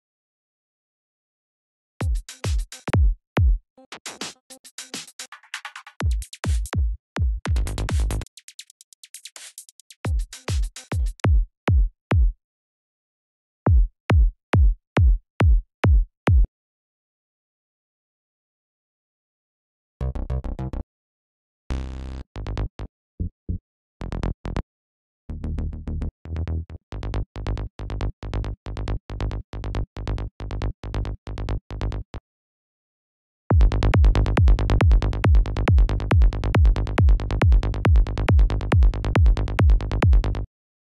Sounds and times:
Drum machine: 0:02.0 - 0:05.3, 0:06.0 - 0:12.4, 0:13.7 - 0:16.5, 0:33.5 - 0:40.3.

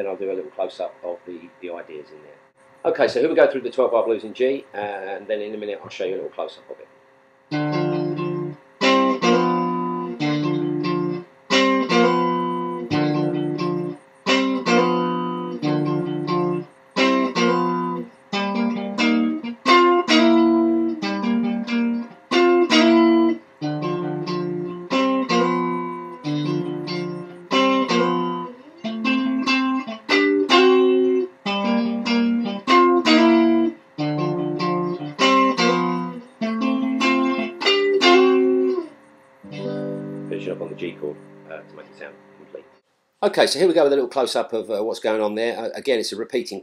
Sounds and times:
Guitar: 0:07.5 - 0:45.6.

